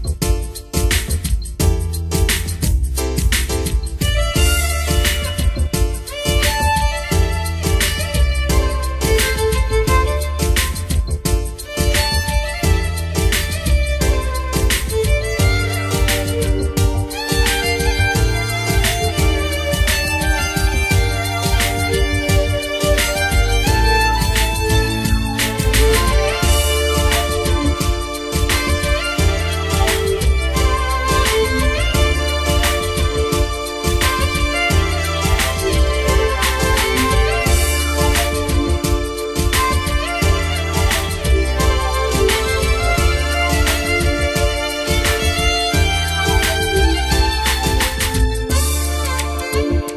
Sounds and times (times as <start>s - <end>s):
Theme music: 11.6s - 49.9s.